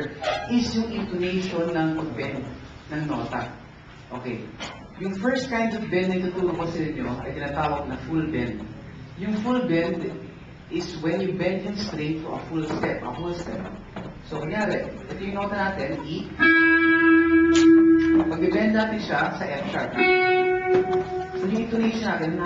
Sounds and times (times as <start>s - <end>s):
Speech: 0.0s - 16.4s, 18.3s - 20.0s, 21.4s - 22.4s
Guitar: 15.0s - 22.4s.